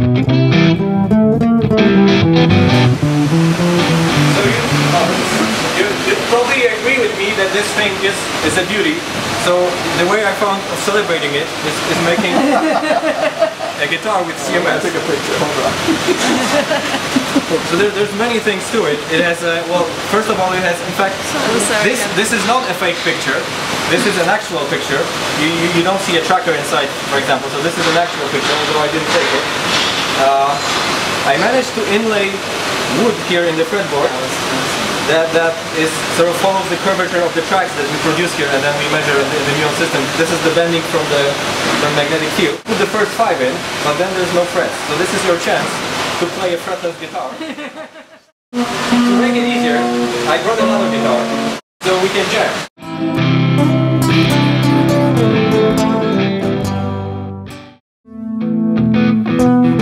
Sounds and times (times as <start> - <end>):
Speech: 4.3 - 12.7, 13.8 - 16.6, 17.2 - 29.5, 30.2 - 47.5, 49.1 - 52.7.